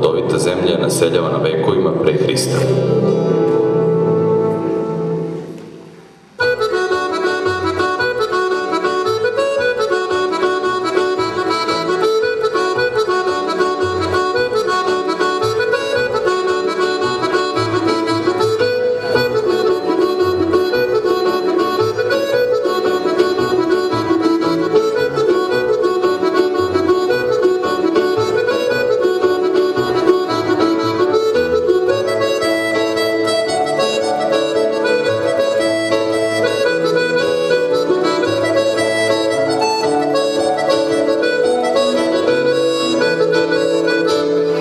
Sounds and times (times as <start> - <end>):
Violin, fiddle: 6.4 - 44.6.